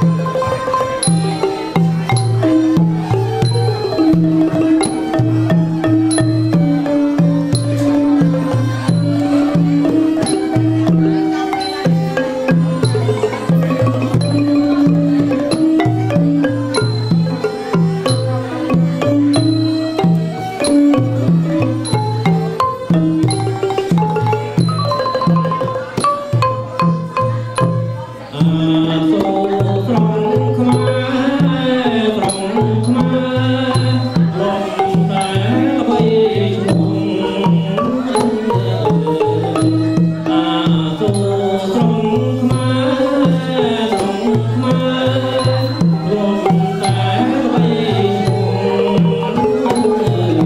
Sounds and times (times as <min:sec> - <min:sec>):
Traditional music: 0:00.0 - 0:50.4.